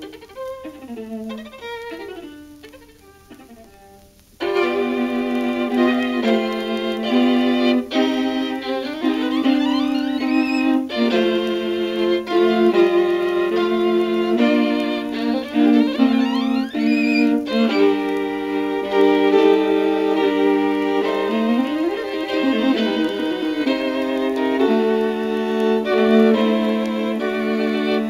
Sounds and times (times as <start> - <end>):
Cello: 0.0 - 28.1
Violin, fiddle: 0.0 - 28.1.